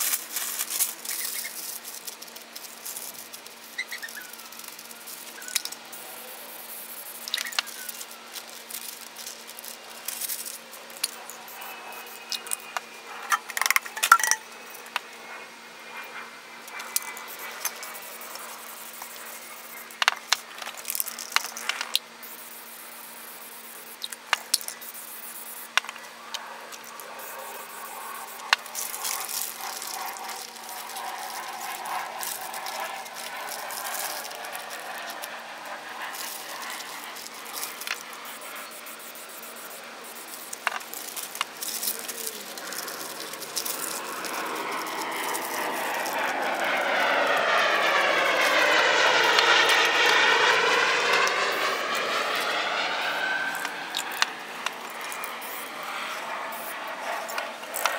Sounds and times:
Spray: 0.0 - 12.7, 16.8 - 25.8, 26.8 - 54.3, 54.9 - 57.9.

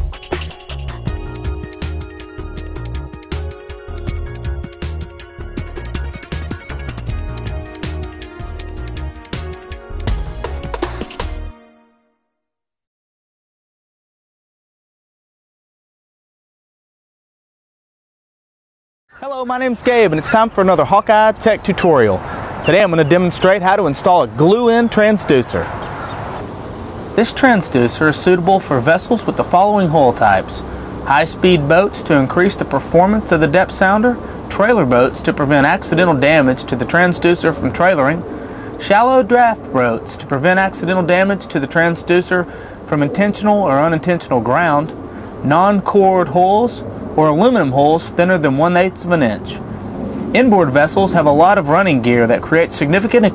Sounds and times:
Speech: 19.2 - 25.7, 27.2 - 38.2, 38.8 - 49.6, 50.4 - 53.3.

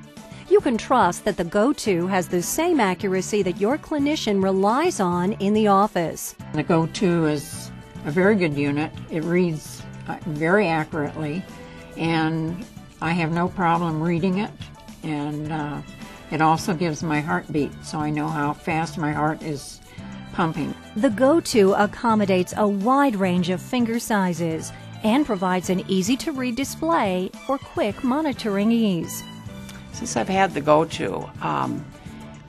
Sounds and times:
Music: 0.0 - 32.4
Speech: 0.5 - 11.4, 12.0 - 19.8, 20.4 - 29.3, 30.0 - 31.9.

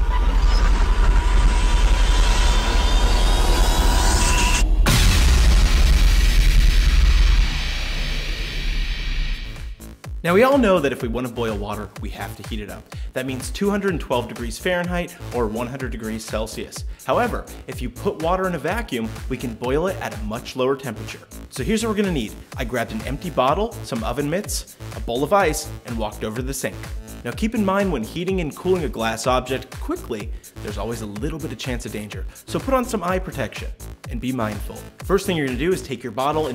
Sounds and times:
Music: 0.2 - 36.5
Speech: 10.2 - 36.5.

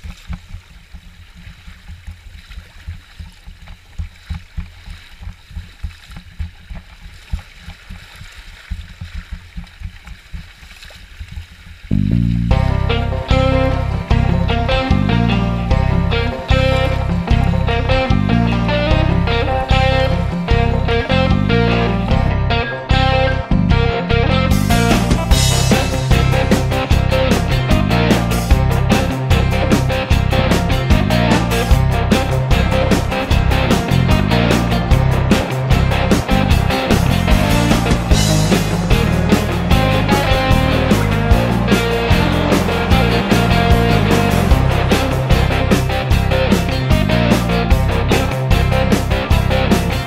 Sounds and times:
Music: 12.0 - 50.0.

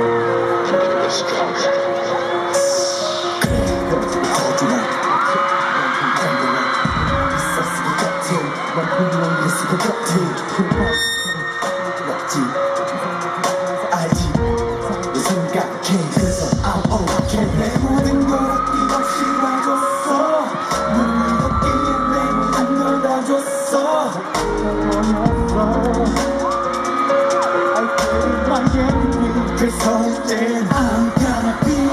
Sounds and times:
Soundtrack music: 0.0 - 31.9.

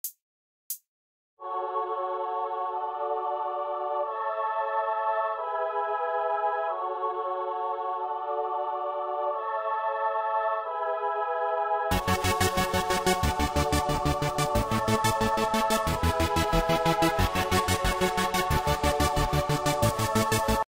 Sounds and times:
Music: 1.4 - 20.6.

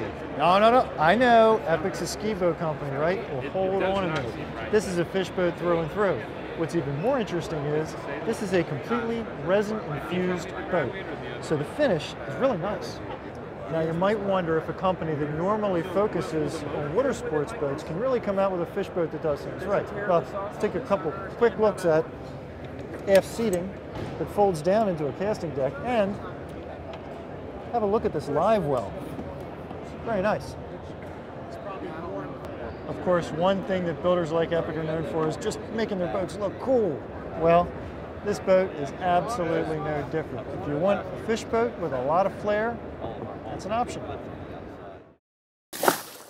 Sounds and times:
Speech: 0.0 - 22.1, 23.0 - 26.4, 27.7 - 28.9, 31.5 - 44.2.

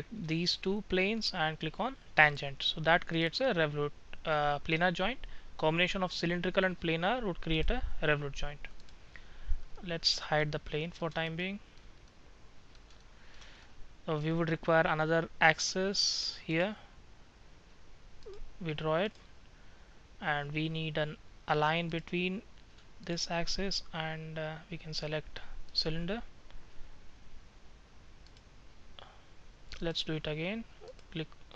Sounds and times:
Speech: 0.0 - 8.7, 9.8 - 11.6, 14.1 - 16.8, 18.6 - 19.2, 20.2 - 26.3, 29.8 - 31.5.

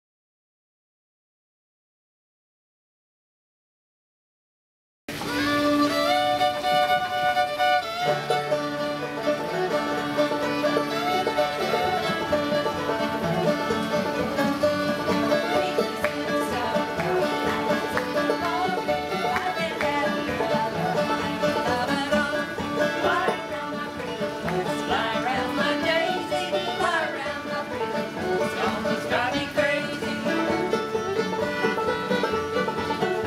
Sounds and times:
Pizzicato: 5.1 - 33.2.

